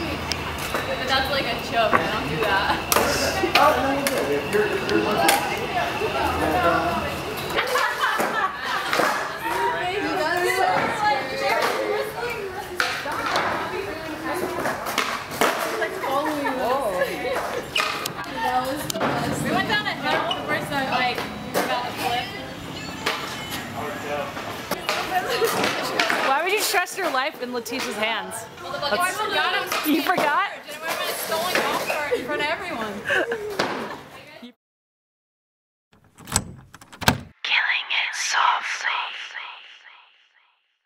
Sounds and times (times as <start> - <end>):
Female speech, woman speaking: 0.8 - 3.5, 9.4 - 14.8, 18.2 - 22.6, 24.9 - 33.2, 34.1 - 34.6, 37.5 - 39.6.